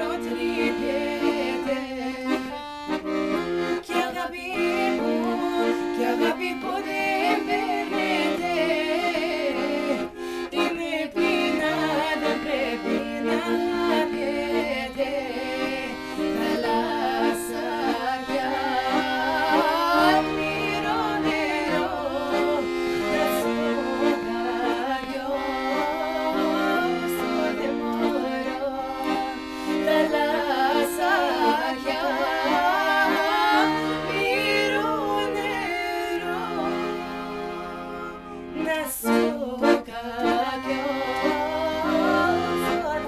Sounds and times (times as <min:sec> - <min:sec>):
Female singing: 0:00.0 - 0:02.6, 0:03.8 - 0:37.8, 0:38.6 - 0:43.0
Music: 0:00.0 - 0:43.0.